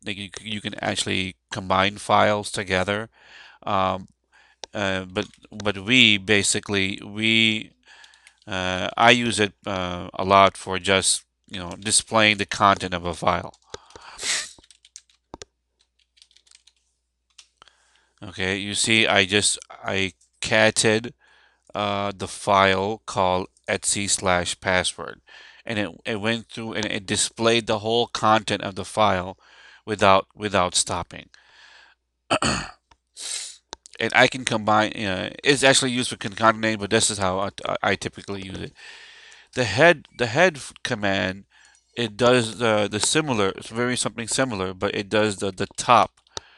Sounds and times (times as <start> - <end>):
Typing: 13.4 - 17.6.